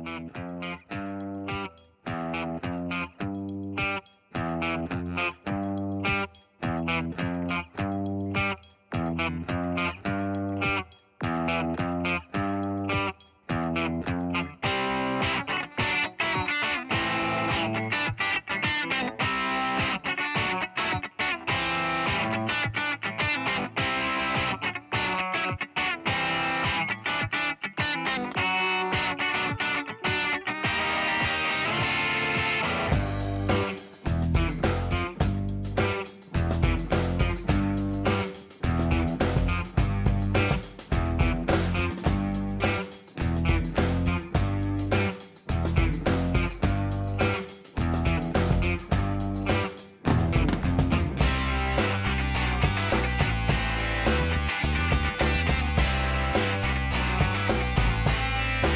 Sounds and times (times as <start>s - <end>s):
Music: 0.0s - 58.7s.